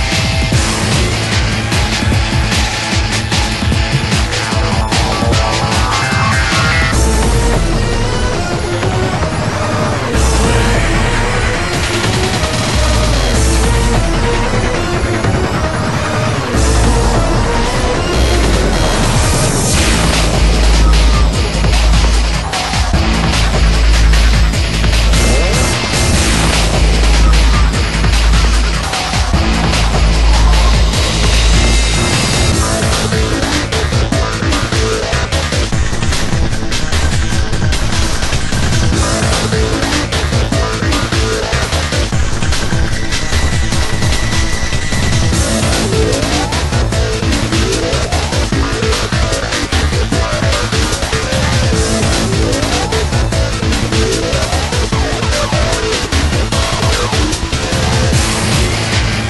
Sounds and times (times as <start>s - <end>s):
Music: 0.0s - 59.3s.